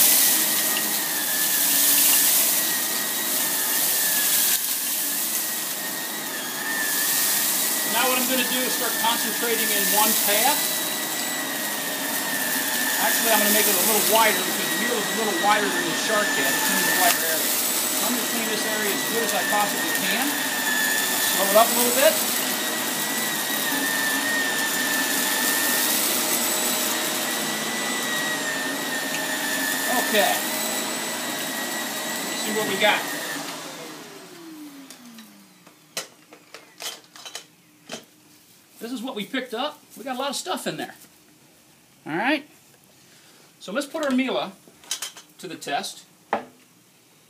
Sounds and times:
Vacuum cleaner: 0.0s - 37.0s.

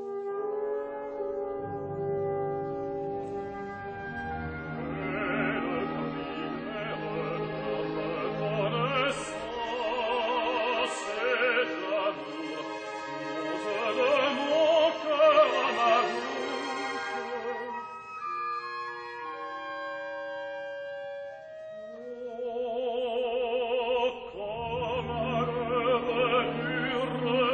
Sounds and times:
Opera: 0.0s - 27.5s.

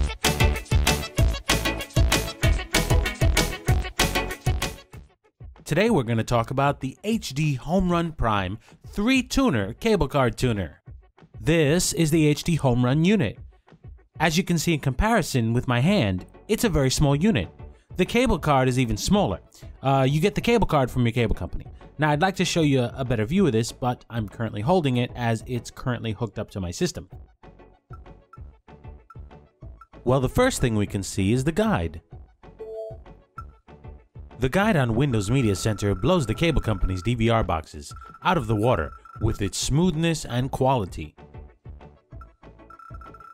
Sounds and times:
Music: 0.0s - 43.3s
Speech: 5.7s - 10.8s, 11.4s - 13.4s, 14.2s - 27.2s, 30.1s - 32.0s, 34.4s - 41.1s.

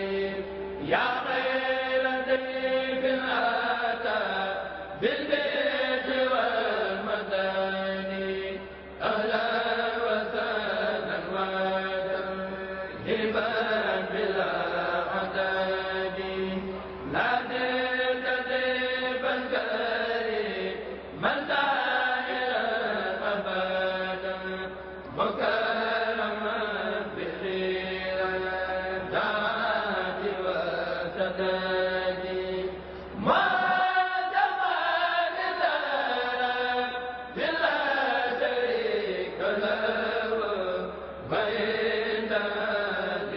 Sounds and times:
Mantra: 0.0s - 43.3s.

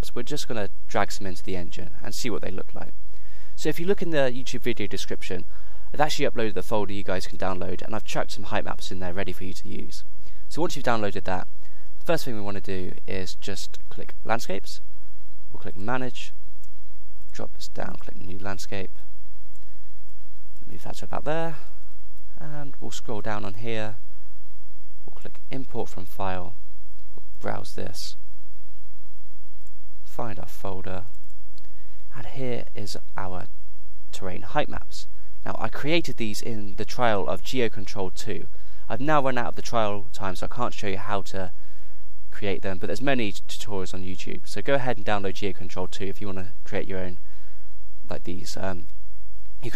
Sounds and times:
Speech: 0.0s - 3.0s, 3.6s - 14.8s, 15.6s - 16.4s, 17.3s - 19.0s, 20.7s - 21.8s, 22.4s - 24.0s, 25.2s - 26.6s, 27.4s - 28.2s, 30.1s - 31.1s, 32.1s - 33.5s, 34.1s - 41.6s, 42.3s - 47.2s, 48.1s - 48.9s.

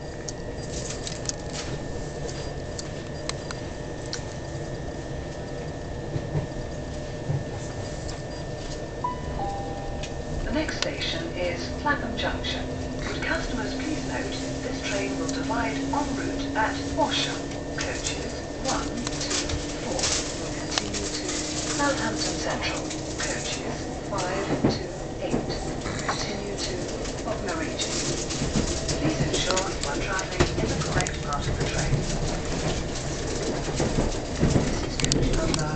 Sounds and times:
Railroad car, train wagon: 0.0s - 35.7s
Train: 0.0s - 35.7s
Speech: 10.5s - 28.0s, 29.0s - 32.0s, 34.7s - 35.7s.

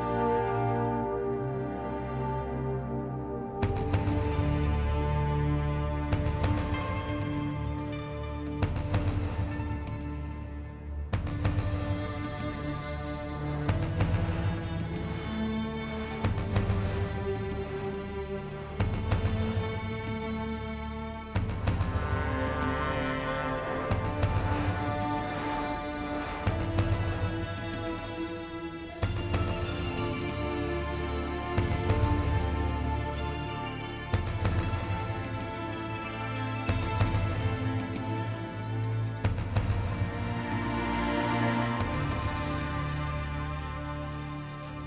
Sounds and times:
Music: 0.0s - 44.8s.

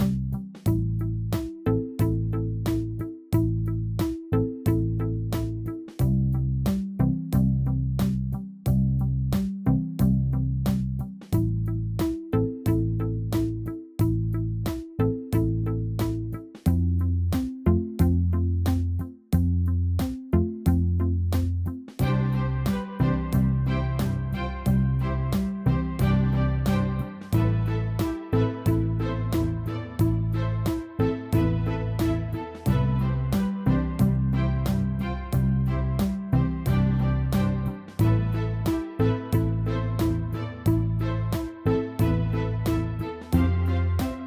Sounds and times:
Music: 0.0s - 44.2s.

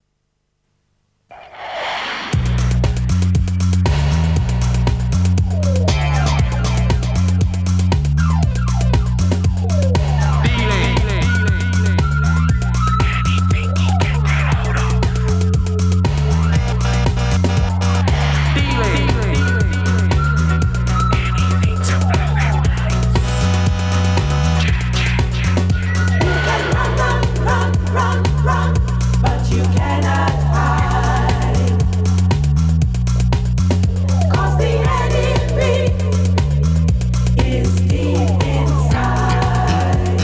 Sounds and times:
Music: 1.7s - 40.2s.

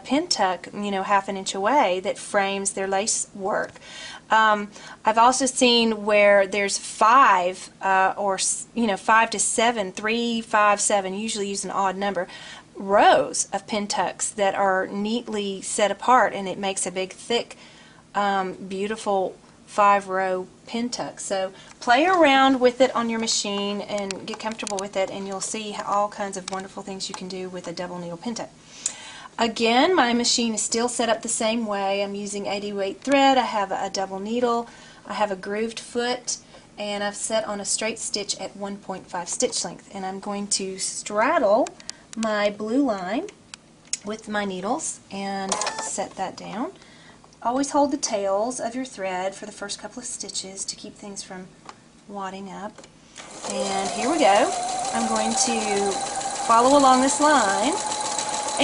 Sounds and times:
Speech: 0.0s - 17.6s, 18.2s - 28.5s, 29.4s - 43.4s, 44.0s - 46.8s, 47.4s - 51.5s, 52.1s - 52.8s, 53.5s - 57.8s.

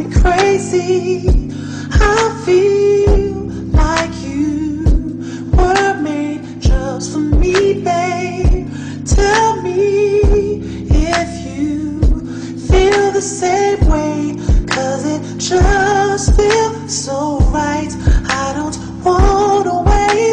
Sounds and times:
Soul music: 0.0s - 20.3s.

